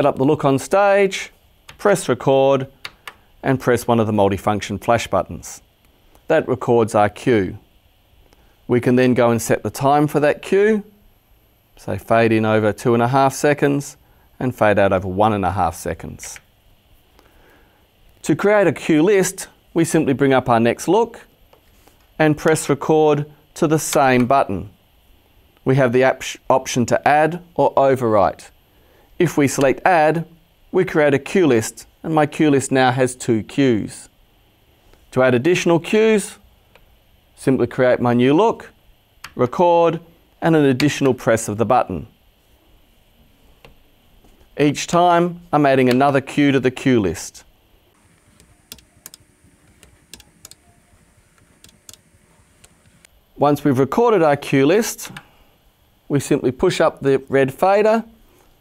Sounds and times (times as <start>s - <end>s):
Speech: 0.0s - 2.8s, 3.4s - 5.7s, 6.3s - 7.7s, 8.7s - 11.0s, 11.8s - 16.5s, 18.2s - 21.3s, 22.2s - 24.8s, 25.6s - 28.6s, 29.2s - 34.2s, 35.1s - 36.5s, 37.4s - 42.2s, 44.6s - 47.5s, 53.4s - 55.2s, 56.1s - 58.2s.